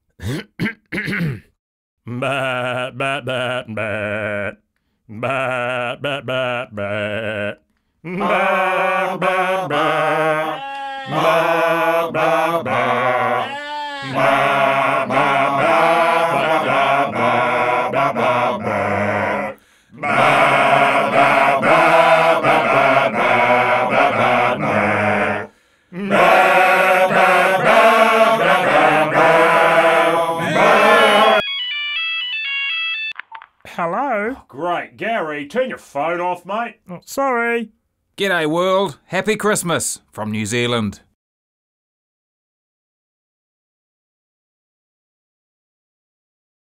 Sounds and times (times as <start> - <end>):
Speech: 33.7 - 41.1.